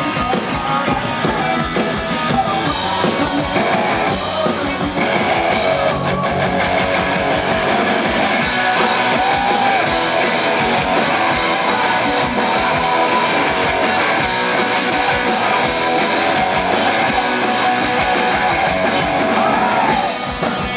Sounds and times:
Music: 0.0 - 20.7.

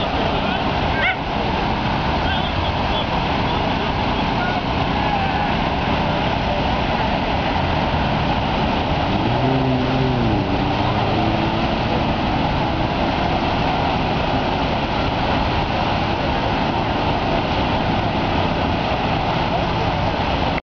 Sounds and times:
Vehicle: 0.0 - 20.6.

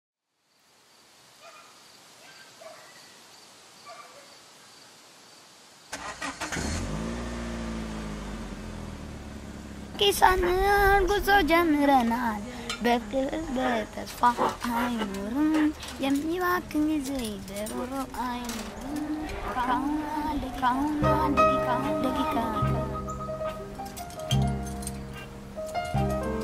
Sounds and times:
Outside, rural or natural: 0.2 - 26.4.

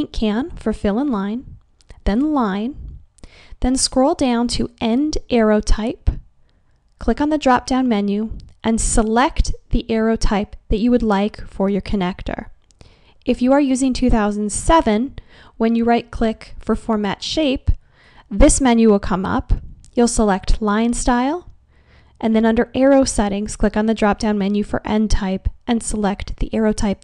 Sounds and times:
Speech: 0.0 - 2.9, 3.6 - 6.2, 7.0 - 12.5, 13.3 - 21.5, 22.2 - 27.0.

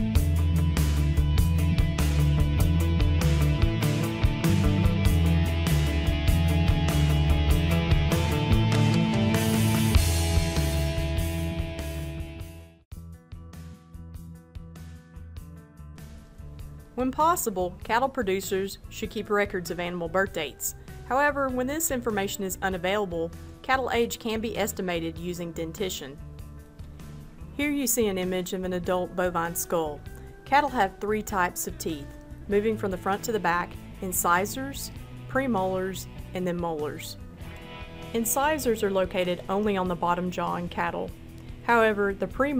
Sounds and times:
Music: 0.0 - 42.5
Speech: 17.0 - 26.2, 27.6 - 37.2, 38.2 - 41.1, 41.7 - 42.5.

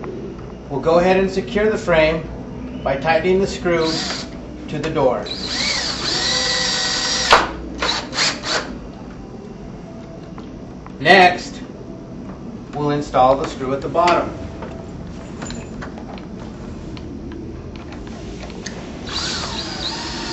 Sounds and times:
Speech: 4.7 - 5.3, 11.0 - 11.7, 12.8 - 14.4.

